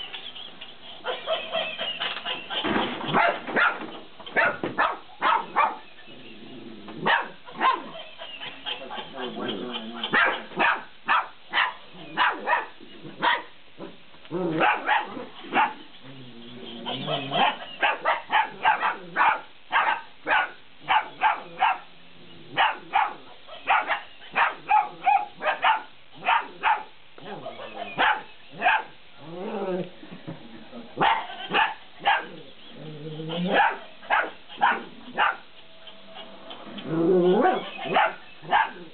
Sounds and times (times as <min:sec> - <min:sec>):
Domestic animals, pets: 0:00.1 - 0:30.0, 0:30.6 - 0:38.9.